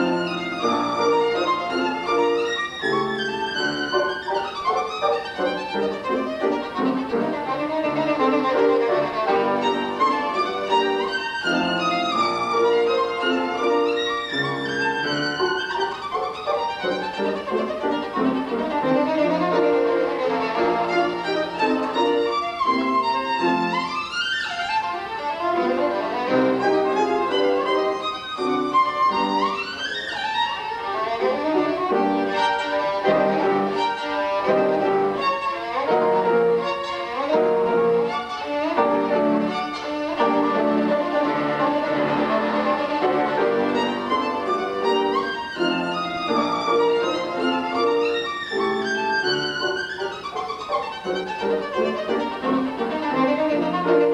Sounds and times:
Violin, fiddle: 0.0 - 54.1.

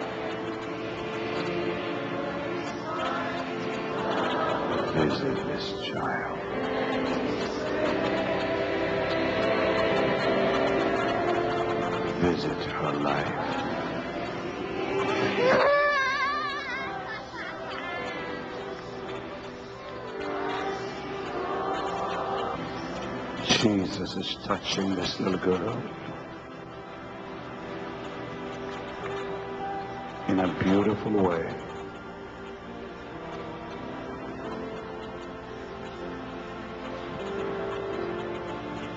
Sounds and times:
Music: 0.0 - 38.9.

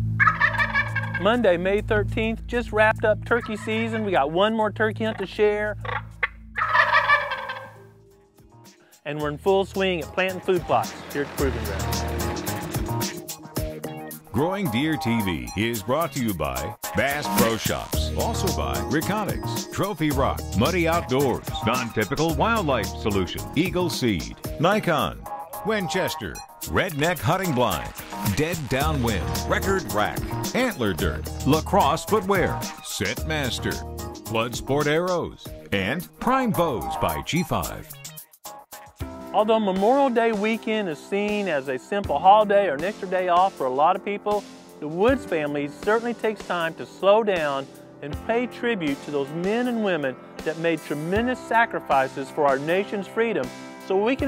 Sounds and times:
Music: 0.0 - 54.2
Speech: 1.2 - 5.8, 9.0 - 12.0, 14.3 - 37.9, 39.3 - 54.2.

